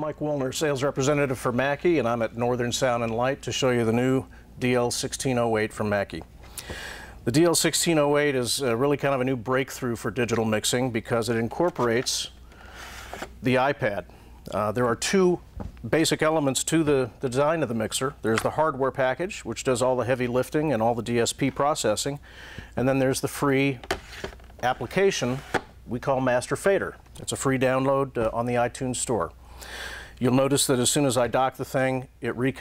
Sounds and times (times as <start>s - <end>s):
Speech: 0.0s - 6.3s, 7.3s - 12.4s, 13.4s - 22.2s, 22.8s - 23.8s, 24.6s - 29.4s, 30.2s - 32.6s.